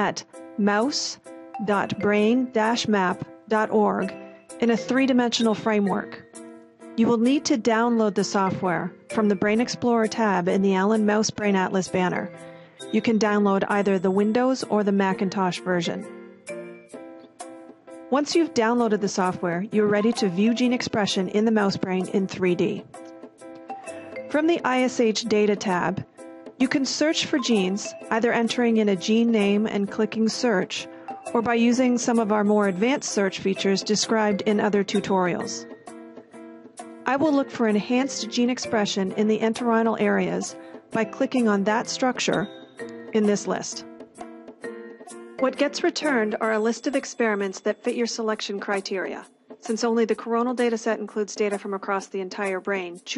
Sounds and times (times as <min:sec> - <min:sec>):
Speech: 0:00.0 - 0:06.2, 0:07.0 - 0:12.3, 0:12.9 - 0:16.1, 0:18.1 - 0:22.9, 0:24.4 - 0:35.7, 0:37.1 - 0:42.5, 0:43.2 - 0:43.8, 0:45.4 - 0:53.1
Music: 0:00.0 - 0:53.1.